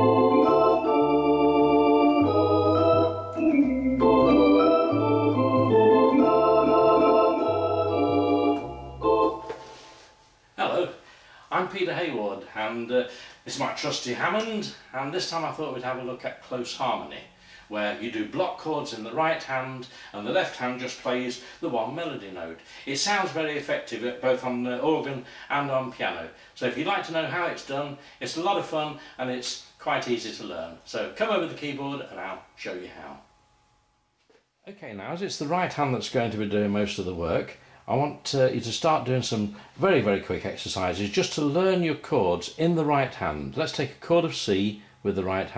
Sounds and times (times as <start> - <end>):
Speech: 10.6 - 33.3, 34.6 - 45.5.